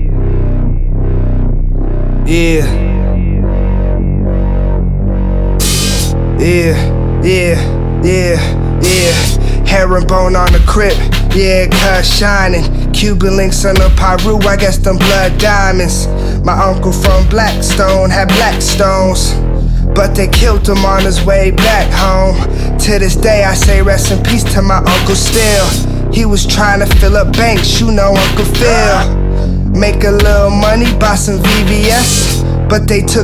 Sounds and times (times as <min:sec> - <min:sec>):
Music: 0:00.0 - 0:33.2.